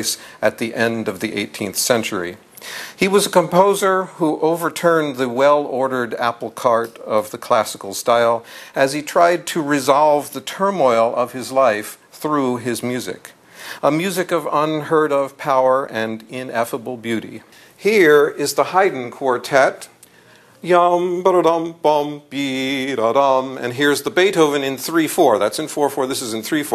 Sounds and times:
Speech: 0.0 - 2.4, 3.0 - 20.0, 20.6 - 26.7.

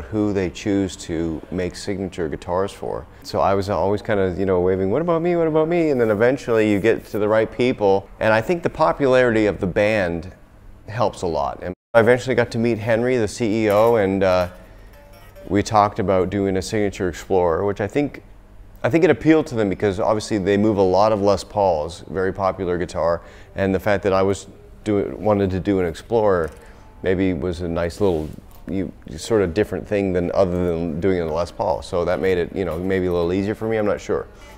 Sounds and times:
Speech: 0.0 - 14.6, 15.5 - 34.3.

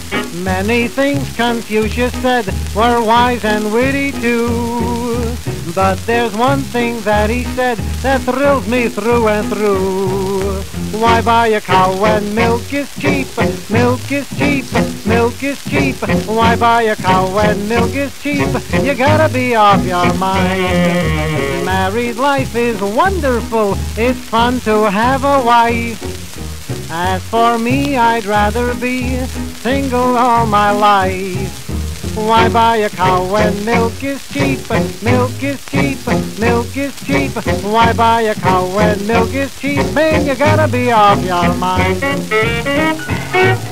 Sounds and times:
Music: 0.0 - 43.7
Speech: 21.7 - 26.0.

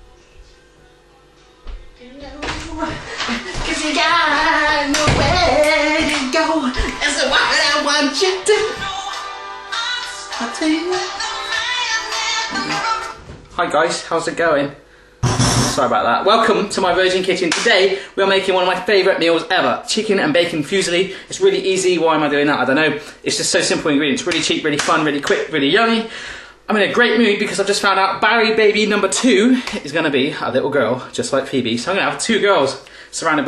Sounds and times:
Music: 0.0 - 13.6, 15.0 - 15.9
Speech: 13.6 - 14.8, 15.7 - 26.1, 26.7 - 33.4.

